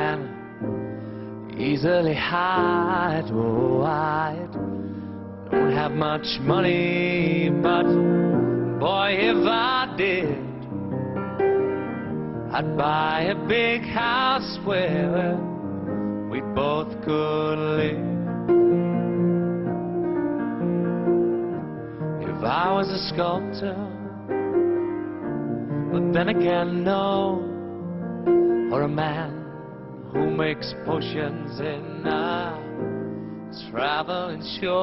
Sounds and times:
Male singing: 0.0 - 0.4, 1.5 - 4.6, 5.6 - 8.1, 8.8 - 10.6, 12.5 - 15.5, 16.3 - 18.1, 22.2 - 24.2, 25.9 - 27.6, 28.7 - 29.6, 30.2 - 32.8, 33.5 - 34.8
Music: 0.0 - 34.8.

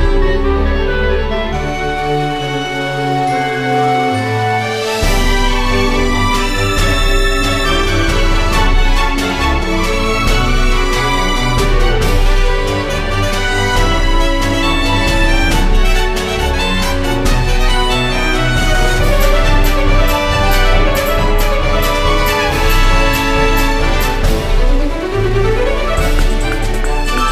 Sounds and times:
Music: 0.0 - 27.3.

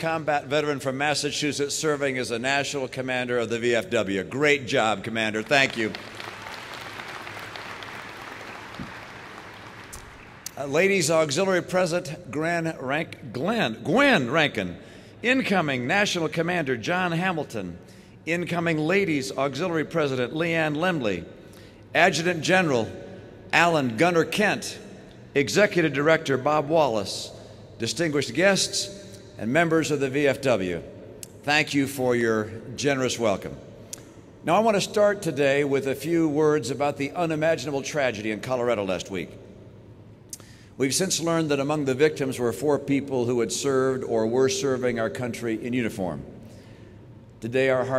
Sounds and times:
Male speech, man speaking: 0.0 - 6.0, 10.5 - 21.2, 22.0 - 22.9, 23.5 - 24.8, 25.4 - 30.8, 31.4 - 33.6, 34.4 - 39.4, 40.8 - 46.3, 47.4 - 47.9
Narration, monologue: 0.0 - 47.9.

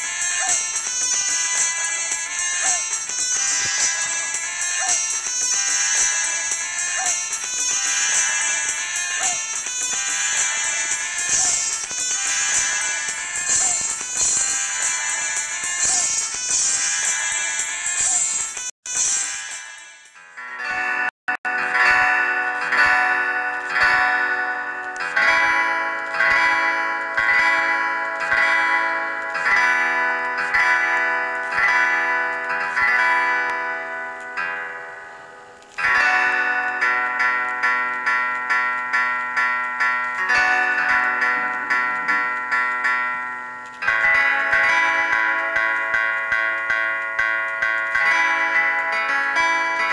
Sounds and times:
Music: 0.0 - 49.9.

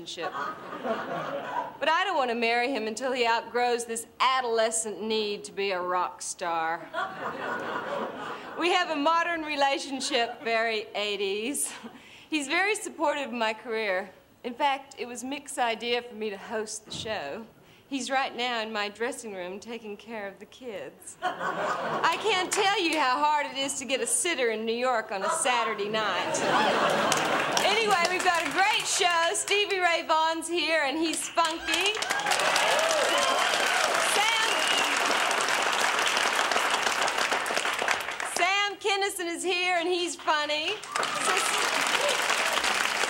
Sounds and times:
Female speech, woman speaking: 0.0 - 0.4, 1.8 - 6.8, 8.6 - 11.8, 12.4 - 21.2, 22.0 - 26.4, 27.6 - 32.0, 34.1 - 34.7, 38.3 - 41.5.

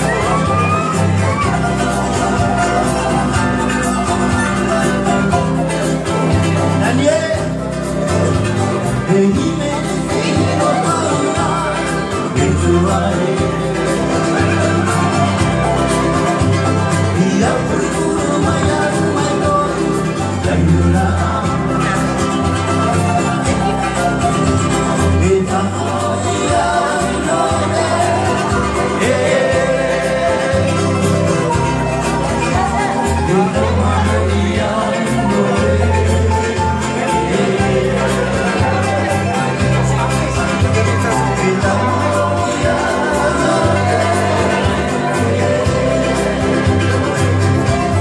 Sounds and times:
Bluegrass: 0.0 - 48.0
Crowd: 0.0 - 48.0.

